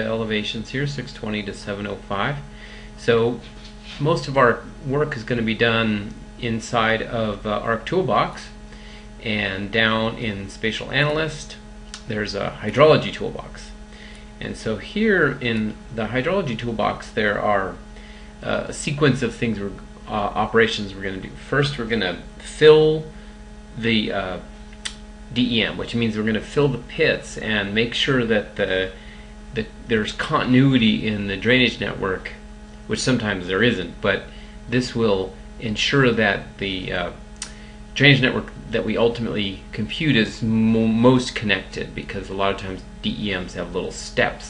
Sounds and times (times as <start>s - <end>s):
Speech: 0.0s - 8.6s, 9.2s - 13.8s, 14.4s - 17.8s, 18.4s - 23.2s, 23.8s - 24.5s, 25.3s - 37.2s, 38.0s - 44.5s.